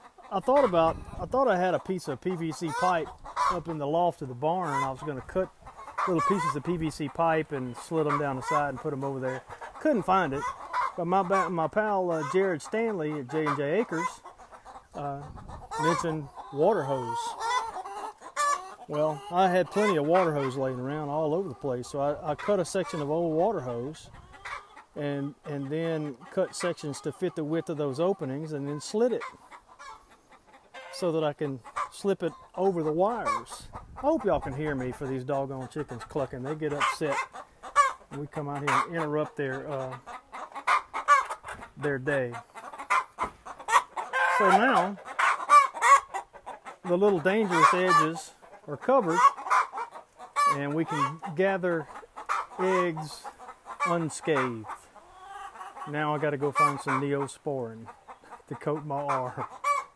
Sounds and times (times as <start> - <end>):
Cluck: 0.0 - 59.9.